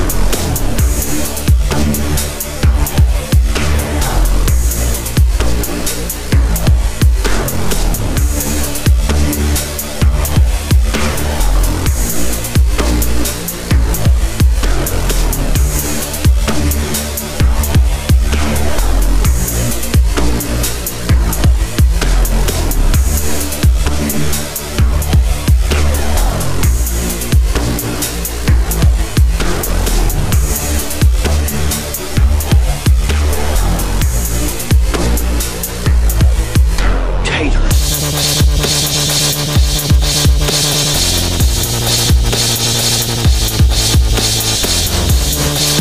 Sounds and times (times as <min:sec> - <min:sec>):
Drum and bass: 0:00.0 - 0:45.8
Dubstep: 0:00.0 - 0:45.8.